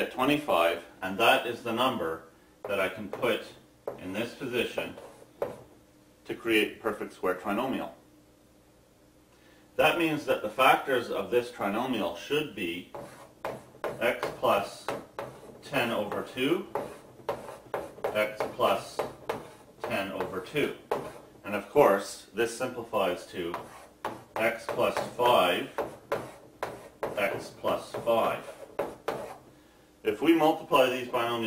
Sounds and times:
Speech: 0:00.0 - 0:05.0, 0:06.2 - 0:08.0, 0:09.8 - 0:12.9, 0:14.0 - 0:15.0, 0:15.6 - 0:16.7, 0:18.2 - 0:19.1, 0:19.8 - 0:23.7, 0:24.4 - 0:25.8, 0:27.2 - 0:28.6, 0:30.0 - 0:31.4
Inside, small room: 0:00.0 - 0:31.4.

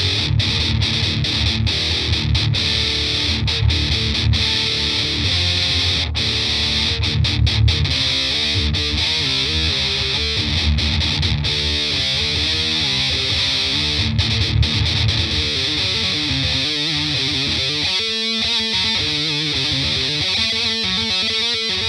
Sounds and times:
Music: 0:00.0 - 0:21.8.

